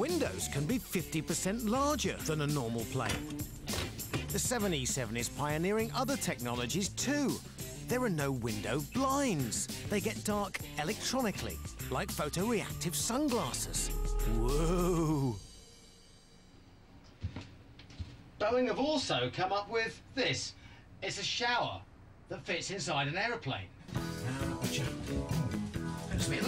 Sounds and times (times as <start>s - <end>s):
Speech: 0.0s - 3.3s, 4.3s - 15.4s, 18.4s - 23.7s, 26.1s - 26.4s
Music: 0.0s - 17.4s, 23.9s - 26.4s.